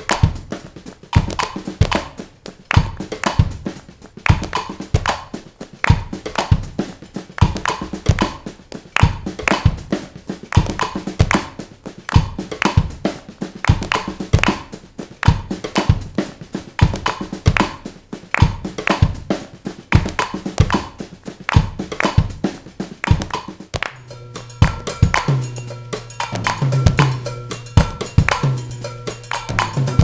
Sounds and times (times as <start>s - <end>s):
Drum: 0.0s - 30.0s
Drum kit: 0.0s - 30.0s.